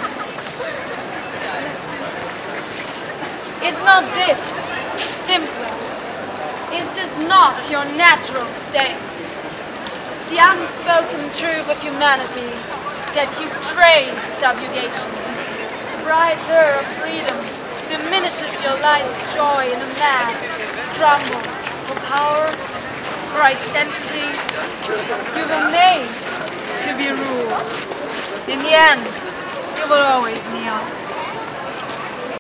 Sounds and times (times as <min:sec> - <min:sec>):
Female speech, woman speaking: 0:03.6 - 0:05.8, 0:06.7 - 0:09.1, 0:10.2 - 0:15.2, 0:16.0 - 0:22.6, 0:23.3 - 0:24.4, 0:25.4 - 0:26.2, 0:26.8 - 0:27.6, 0:28.5 - 0:29.2, 0:29.8 - 0:30.9.